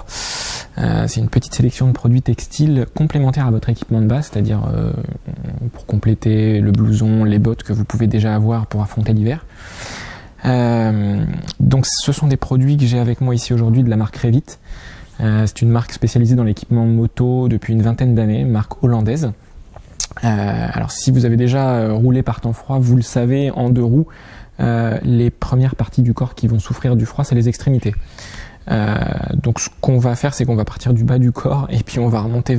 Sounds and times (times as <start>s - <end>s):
Speech: 0.8s - 9.5s, 10.4s - 14.6s, 15.2s - 19.4s, 20.0s - 28.0s, 28.7s - 32.5s.